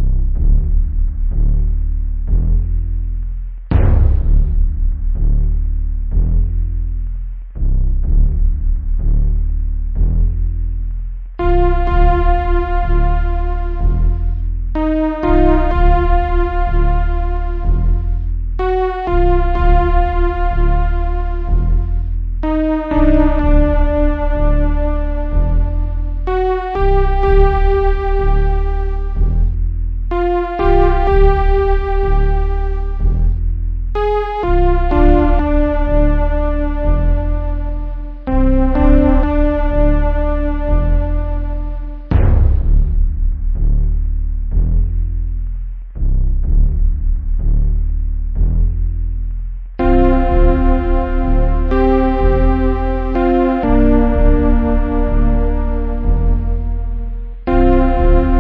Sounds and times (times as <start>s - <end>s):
Theme music: 11.4s - 43.2s, 49.8s - 58.4s.